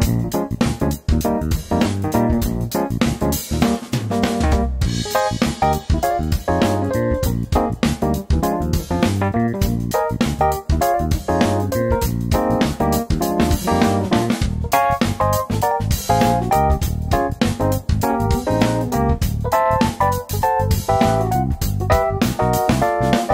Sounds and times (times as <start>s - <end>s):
Music: 0.0s - 23.3s.